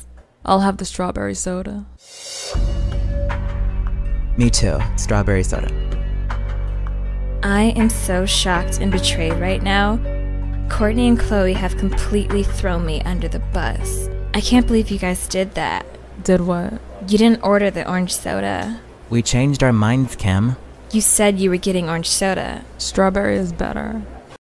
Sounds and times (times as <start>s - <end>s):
Speech: 4.4s - 5.7s, 10.7s - 24.2s.